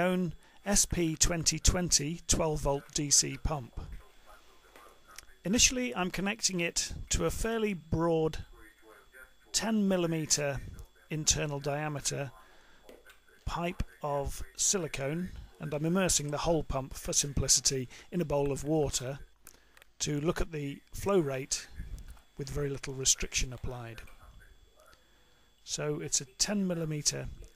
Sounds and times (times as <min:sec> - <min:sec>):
Speech: 0:00.0 - 0:19.3, 0:20.0 - 0:25.0, 0:25.6 - 0:27.5.